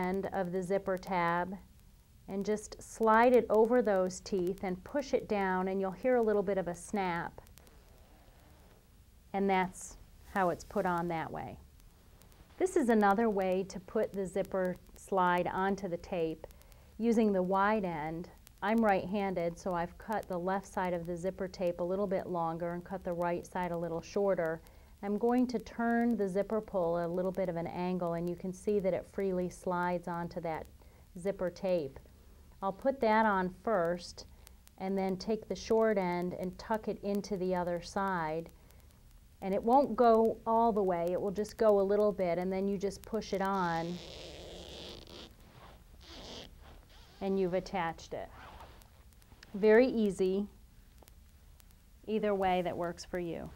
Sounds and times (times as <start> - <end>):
Speech: 0.0 - 1.6, 2.3 - 7.4, 9.4 - 11.6, 12.6 - 32.0, 32.6 - 38.5, 39.4 - 44.0, 47.2 - 48.4, 49.5 - 50.6, 52.1 - 53.5.